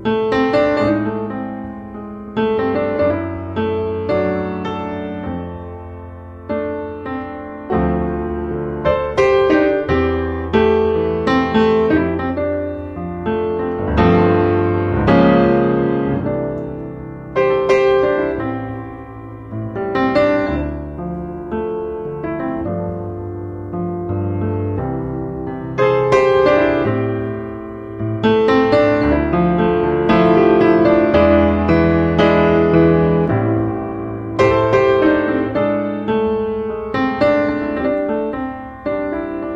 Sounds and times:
Music: 0:00.0 - 0:39.5.

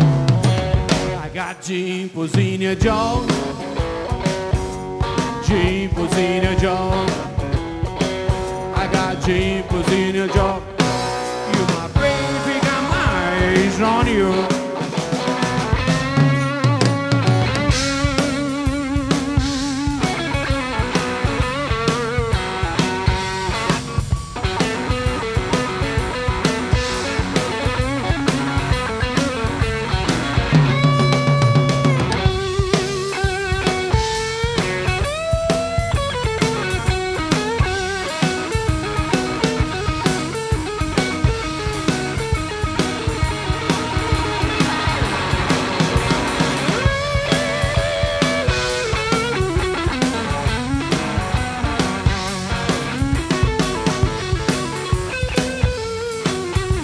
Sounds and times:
Guitar: 0:00.0 - 0:56.8
Psychedelic rock: 0:00.0 - 0:56.8.

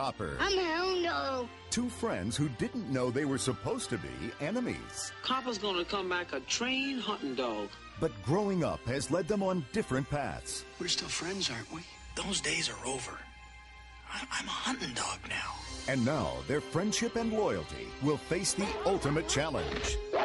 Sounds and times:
Music: 0:00.0 - 0:20.2
Speech: 0:15.9 - 0:20.0.

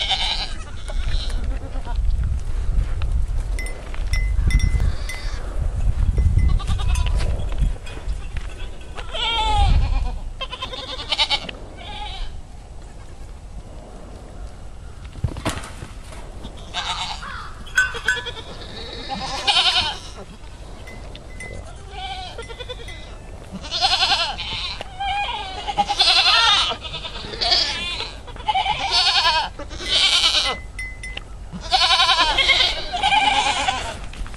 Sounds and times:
Bleat: 0:00.0 - 0:02.0, 0:04.7 - 0:05.4, 0:06.4 - 0:07.3, 0:08.1 - 0:13.2, 0:16.4 - 0:20.7, 0:21.5 - 0:30.7, 0:31.5 - 0:34.1.

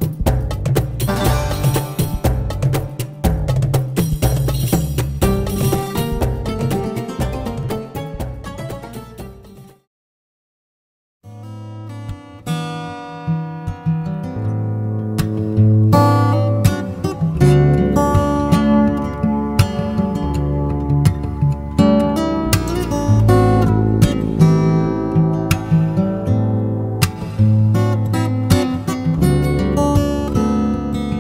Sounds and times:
Music: 0:00.0 - 0:09.9, 0:11.2 - 0:31.2.

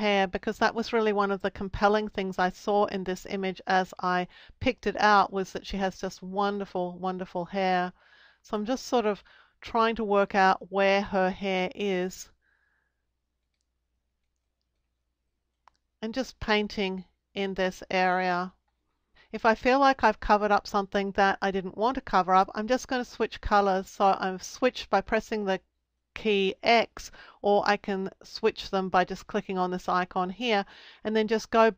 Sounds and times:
Speech: 0:00.0 - 0:07.9, 0:08.5 - 0:12.3, 0:16.0 - 0:18.5, 0:19.4 - 0:25.6, 0:26.2 - 0:31.7
Inside, small room: 0:00.0 - 0:31.7.

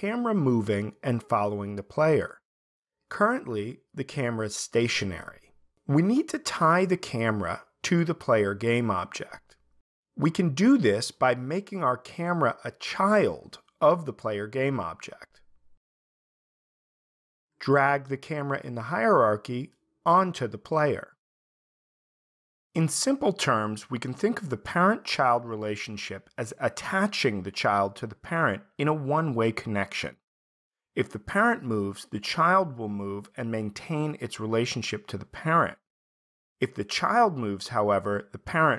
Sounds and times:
Speech: 0:00.0 - 0:02.4, 0:03.1 - 0:09.6, 0:10.2 - 0:15.4, 0:17.6 - 0:21.2, 0:22.8 - 0:30.2, 0:31.0 - 0:35.9, 0:36.6 - 0:38.7.

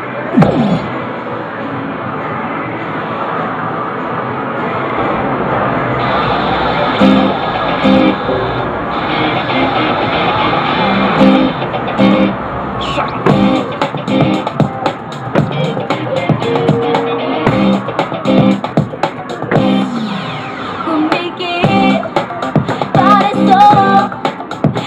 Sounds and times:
Music: 0:06.0 - 0:24.8.

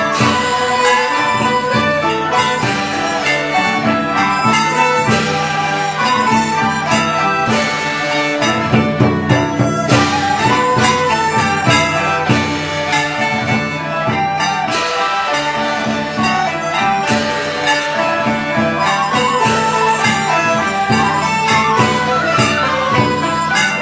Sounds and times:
Classical music: 0:00.0 - 0:23.8
Traditional music: 0:00.0 - 0:23.8.

